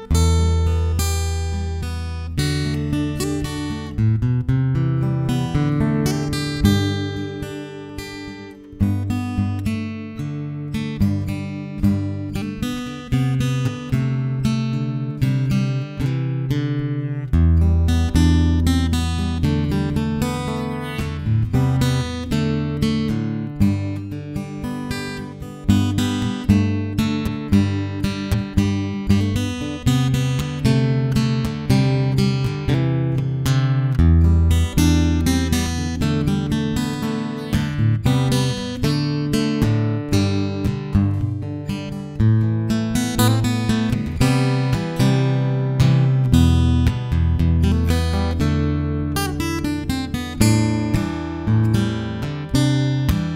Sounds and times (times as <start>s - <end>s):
Acoustic guitar: 0.0s - 53.3s
Strum: 0.0s - 53.3s.